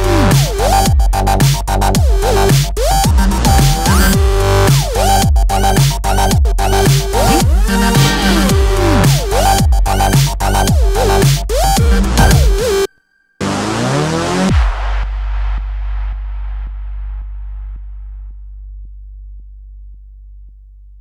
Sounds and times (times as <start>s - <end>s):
Music: 0.0s - 21.0s.